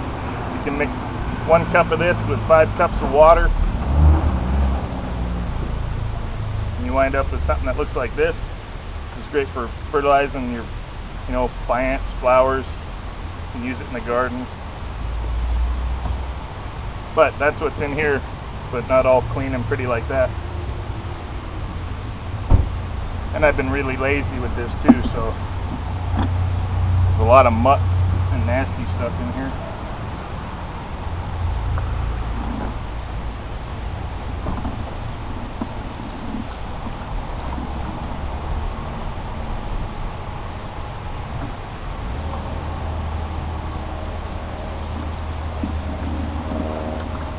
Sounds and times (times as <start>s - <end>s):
Speech: 0.7s - 0.9s, 1.5s - 3.6s, 6.8s - 8.4s, 9.2s - 10.7s, 11.3s - 12.7s, 13.6s - 14.5s, 17.2s - 18.2s, 18.8s - 20.3s, 23.3s - 25.4s, 27.2s - 29.6s.